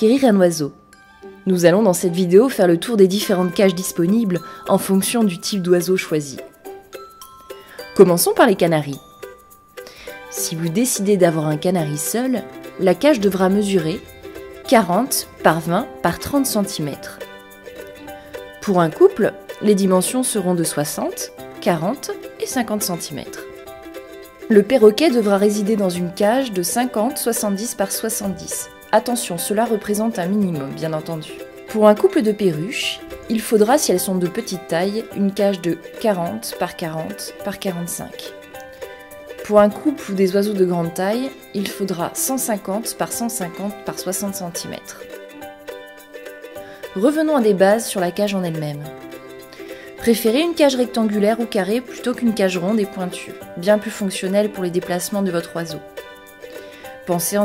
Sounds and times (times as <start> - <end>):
Speech: 0.0 - 0.8, 1.5 - 6.5, 8.0 - 9.0, 10.3 - 14.0, 14.7 - 17.2, 18.6 - 23.4, 24.5 - 38.3, 39.4 - 45.0, 47.0 - 48.9, 50.0 - 55.8, 57.1 - 57.4
Music: 0.0 - 57.4.